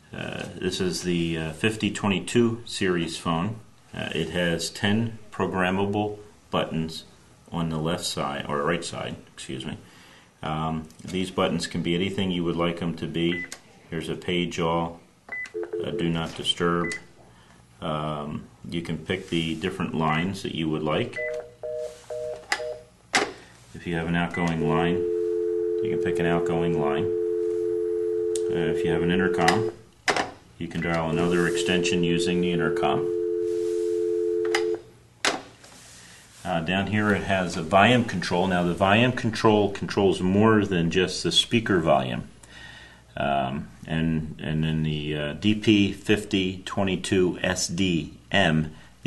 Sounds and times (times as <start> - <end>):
Speech: 0.1 - 15.0, 15.8 - 17.0, 17.8 - 21.2, 23.7 - 25.0, 25.8 - 27.1, 28.4 - 29.8, 30.6 - 33.1, 36.4 - 42.3, 43.2 - 49.0.